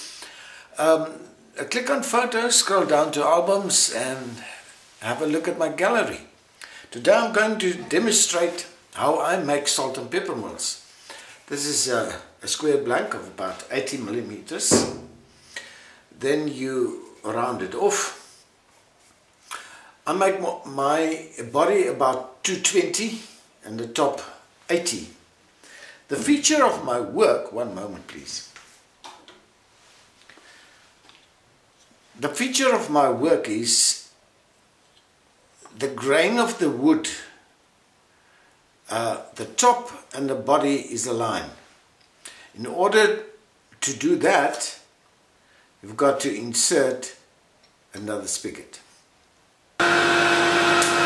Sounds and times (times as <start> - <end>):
Speech: 0.8 - 6.3, 6.9 - 10.8, 11.5 - 15.1, 16.2 - 18.2, 20.0 - 25.2, 26.1 - 28.6, 32.2 - 34.2, 35.7 - 37.4, 38.8 - 41.6, 42.6 - 44.9, 45.8 - 47.3, 47.9 - 48.9.